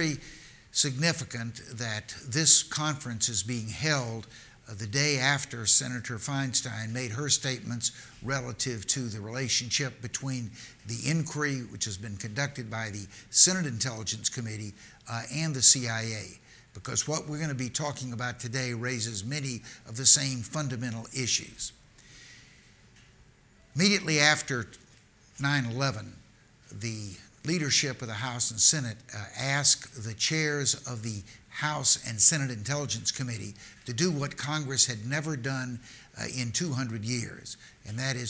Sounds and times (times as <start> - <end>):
Male speech, man speaking: 0.0 - 0.2, 0.8 - 21.8, 23.8 - 24.8, 25.4 - 38.3
Narration, monologue: 0.0 - 38.3.